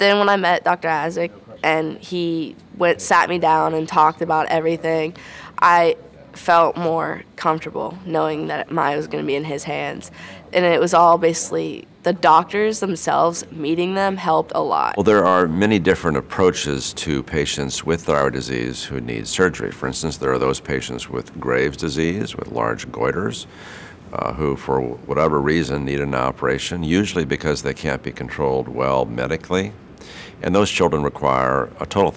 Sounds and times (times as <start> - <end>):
Speech: 0.0 - 23.5, 24.1 - 29.8, 30.4 - 32.1.